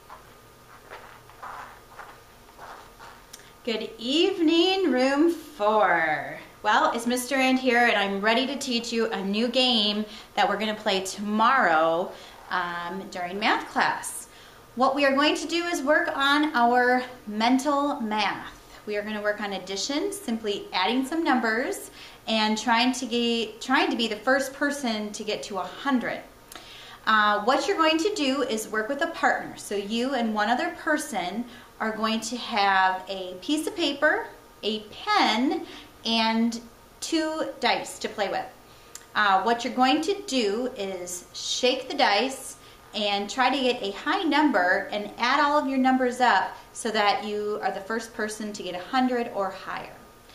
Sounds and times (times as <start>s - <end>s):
Speech: 3.7s - 26.3s, 27.1s - 50.0s.